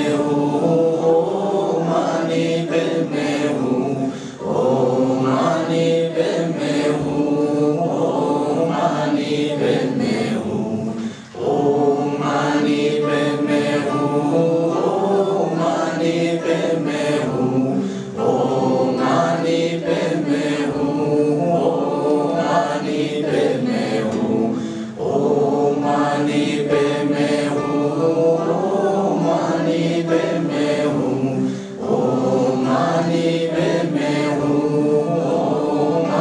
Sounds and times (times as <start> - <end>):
Mantra: 0.0 - 36.2.